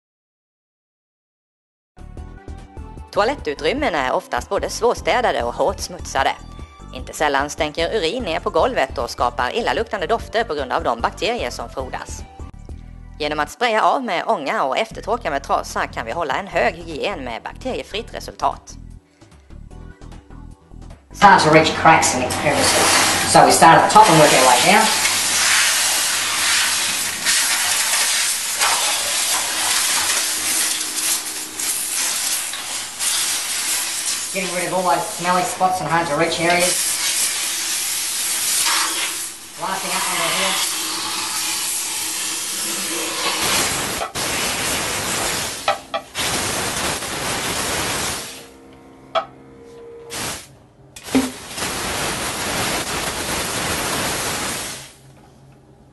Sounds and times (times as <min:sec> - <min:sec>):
Hiss: 0:24.0 - 0:35.6, 0:36.5 - 0:48.5, 0:50.1 - 0:55.0.